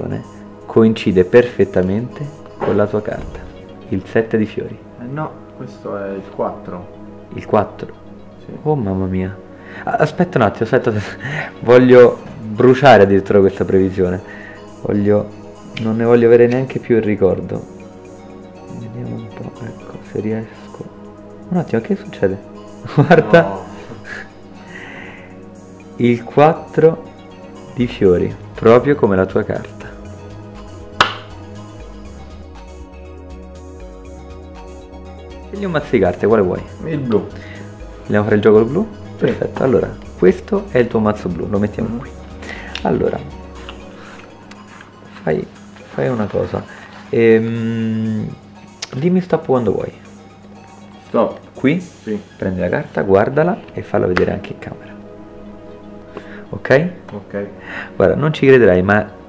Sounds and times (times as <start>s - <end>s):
Speech: 0.0s - 7.9s, 8.5s - 14.2s, 14.8s - 17.7s, 18.7s - 20.9s, 21.5s - 22.4s, 23.1s - 23.8s, 26.0s - 27.0s, 27.8s - 30.0s, 35.5s - 37.3s, 38.1s - 42.1s, 42.8s - 43.3s, 45.2s - 50.0s, 51.1s - 54.9s, 56.5s - 59.1s
Music: 0.0s - 59.2s.